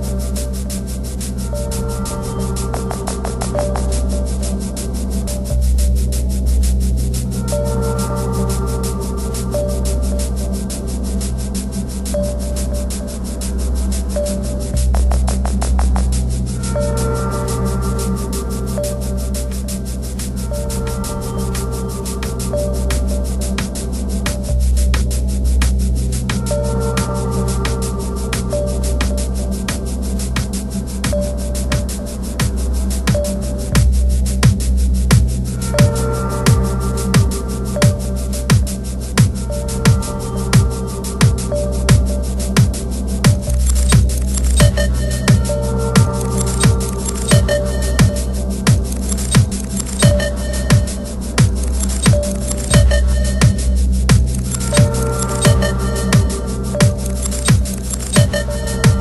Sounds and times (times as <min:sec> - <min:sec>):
Techno: 0:00.0 - 0:59.0.